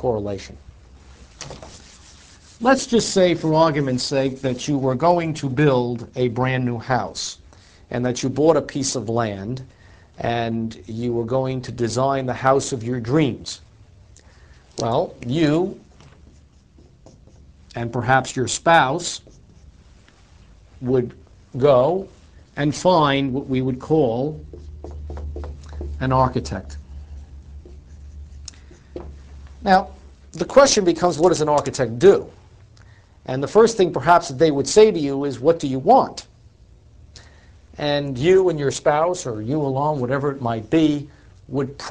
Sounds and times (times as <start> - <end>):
Speech: 0.0 - 0.6, 2.6 - 13.6, 14.8 - 15.9, 17.7 - 19.3, 20.8 - 24.5, 26.0 - 26.8, 29.6 - 32.4, 33.3 - 36.3, 37.8 - 41.9.